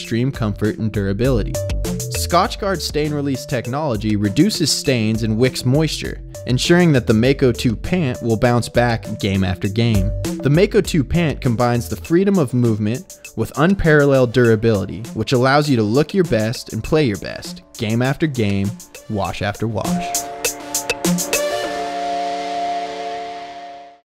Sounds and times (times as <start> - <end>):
Speech: 0.0 - 20.2
Music: 0.0 - 24.0.